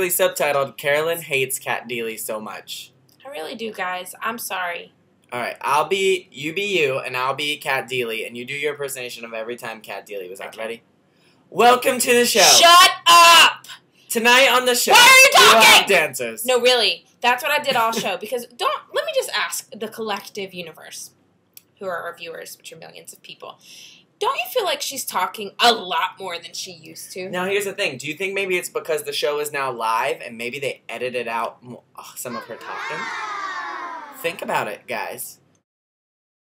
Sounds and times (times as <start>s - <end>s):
Speech: 0.0s - 10.8s, 11.6s - 21.1s, 24.2s - 33.1s, 34.2s - 35.4s.